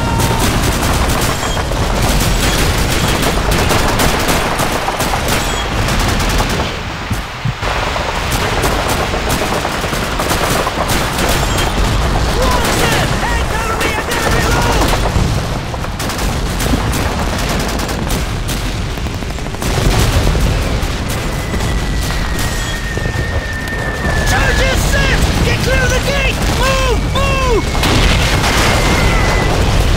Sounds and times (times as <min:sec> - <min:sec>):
Speech: 0:12.4 - 0:14.9, 0:24.3 - 0:27.6.